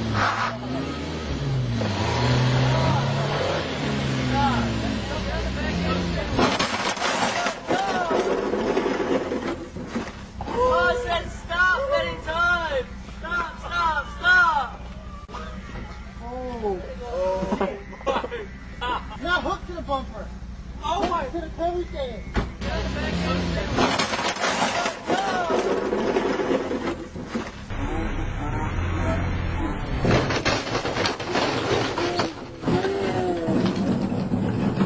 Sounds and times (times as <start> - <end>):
Car: 0.0 - 34.8
Speech: 19.2 - 23.8.